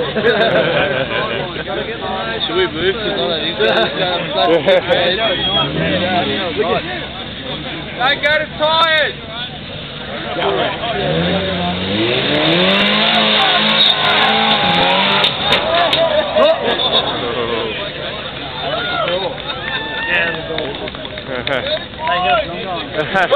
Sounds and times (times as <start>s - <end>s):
Car: 0.0s - 23.3s.